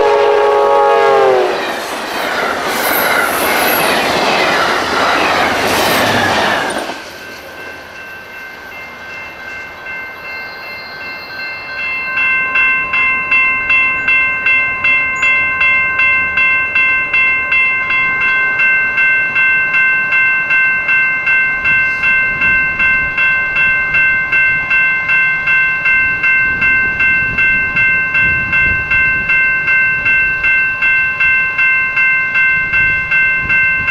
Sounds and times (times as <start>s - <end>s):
Train horn: 0.0s - 1.8s
Train whistle: 0.0s - 1.8s
Railroad car, train wagon: 0.0s - 33.9s.